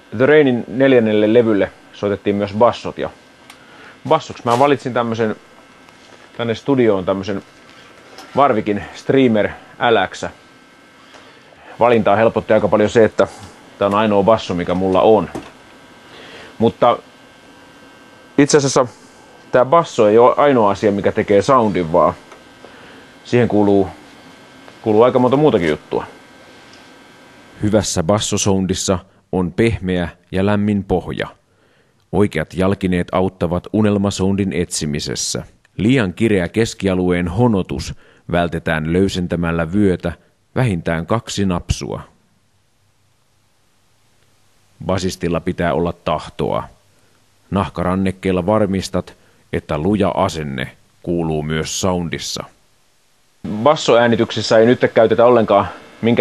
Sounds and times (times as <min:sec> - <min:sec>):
Speech: 0:00.1 - 0:03.2, 0:04.0 - 0:05.4, 0:06.4 - 0:07.5, 0:08.3 - 0:10.4, 0:11.7 - 0:15.5, 0:16.6 - 0:17.0, 0:18.4 - 0:22.2, 0:23.2 - 0:24.0, 0:24.8 - 0:26.2, 0:27.6 - 0:31.4, 0:32.1 - 0:42.2, 0:44.8 - 0:46.8, 0:47.5 - 0:52.6, 0:53.5 - 0:56.2.